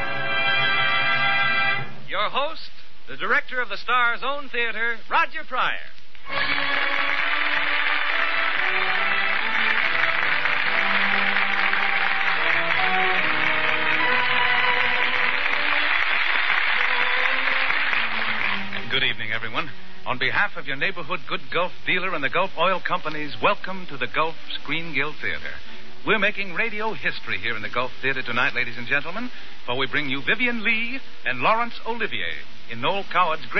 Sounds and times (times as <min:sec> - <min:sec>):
Music: 0:00.0 - 0:02.1, 0:06.2 - 0:20.4
Speech: 0:02.1 - 0:06.0, 0:18.9 - 0:33.5.